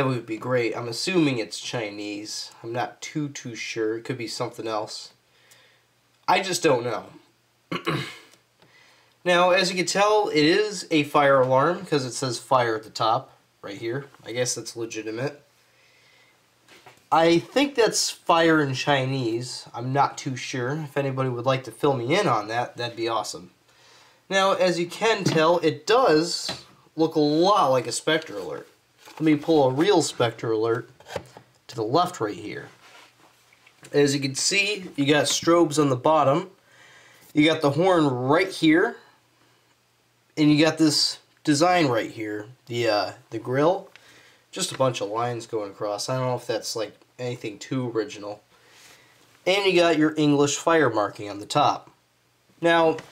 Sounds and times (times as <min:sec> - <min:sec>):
Speech: 0:00.0 - 0:05.2, 0:06.3 - 0:08.0, 0:09.2 - 0:15.5, 0:17.1 - 0:23.6, 0:24.3 - 0:30.9, 0:31.7 - 0:32.8, 0:33.9 - 0:36.6, 0:37.3 - 0:39.1, 0:40.4 - 0:43.9, 0:44.5 - 0:48.4, 0:49.4 - 0:52.0, 0:52.6 - 0:53.1.